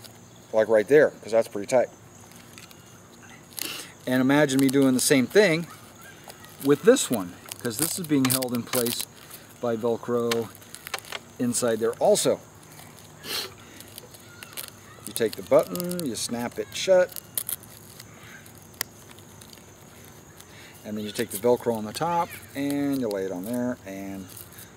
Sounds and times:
Outside, rural or natural: 0.0s - 24.7s.

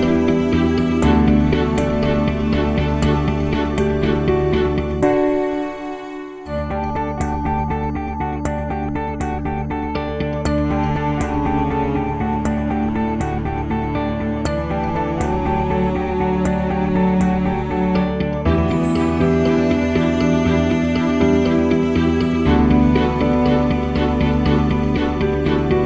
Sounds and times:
Music: 0.0s - 25.8s.

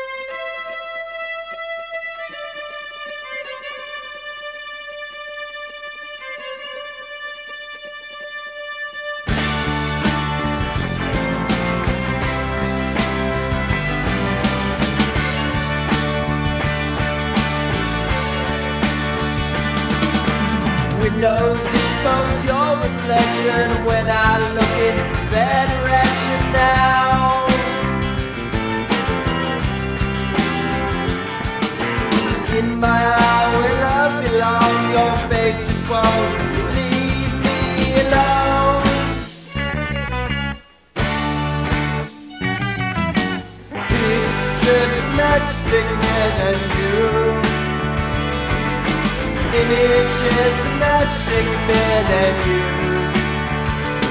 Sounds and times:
Rock music: 0.0s - 54.1s.

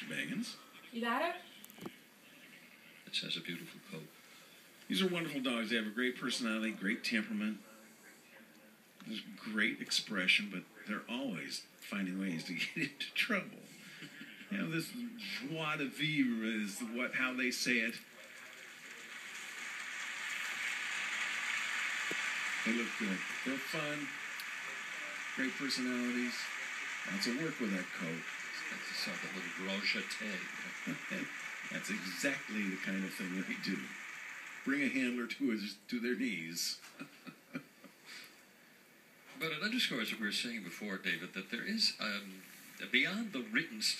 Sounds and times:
Speech: 0.0s - 1.5s, 2.3s - 4.1s, 4.9s - 13.7s, 14.4s - 18.7s, 22.7s - 34.0s, 34.7s - 36.9s, 39.4s - 43.9s.

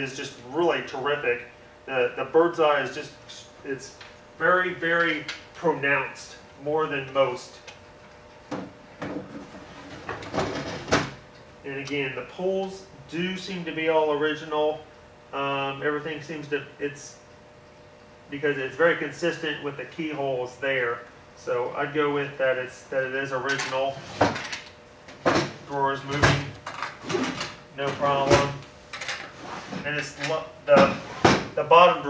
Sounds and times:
Speech: 0.0s - 7.6s, 11.7s - 14.8s, 15.4s - 17.2s, 18.3s - 24.0s, 25.7s - 26.6s, 27.8s - 28.6s, 29.8s - 32.1s
Drawer open or close: 9.0s - 11.2s, 23.9s - 24.6s, 25.2s - 31.5s.

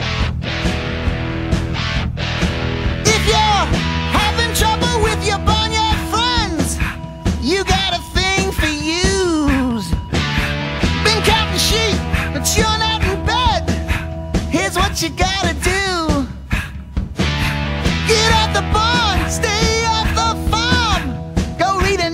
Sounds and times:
Music: 0.0s - 22.1s.

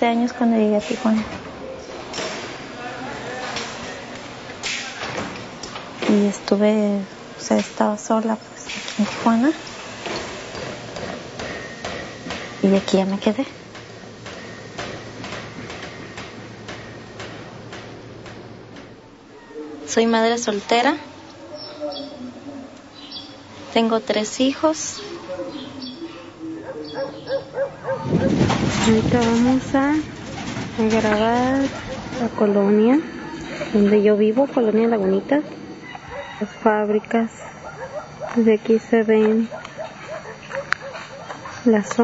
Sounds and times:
Speech: 0.0s - 1.4s, 6.0s - 9.6s, 12.6s - 13.5s, 19.5s - 22.7s, 23.7s - 25.6s, 28.8s - 30.1s, 30.8s - 33.1s, 33.7s - 35.5s, 38.4s - 39.5s, 41.6s - 42.0s.

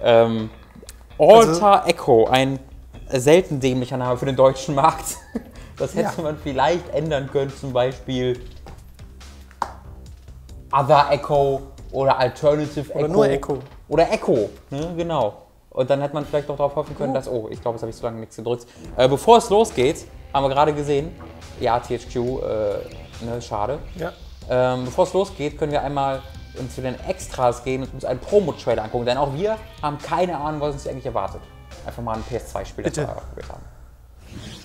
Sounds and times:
Music: 0.0s - 34.6s
Speech: 1.2s - 5.2s, 5.8s - 8.5s, 10.7s - 33.7s.

